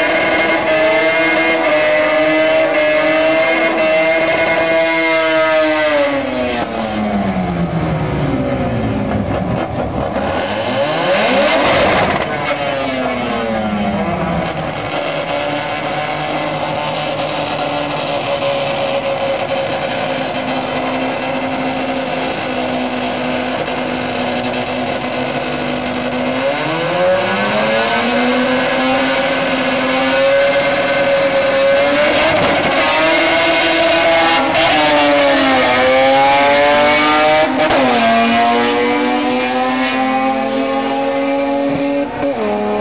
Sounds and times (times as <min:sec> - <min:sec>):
Car: 0:00.0 - 0:42.8.